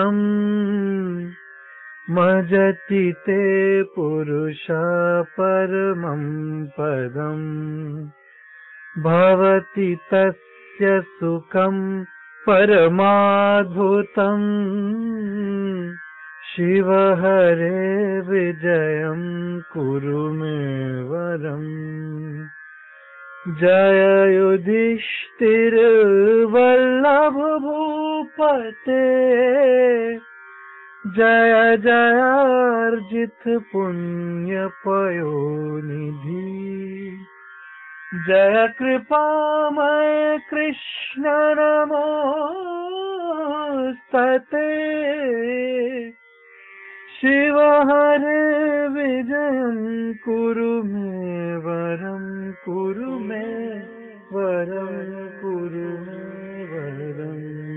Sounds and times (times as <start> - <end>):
Music: 0.0 - 57.7.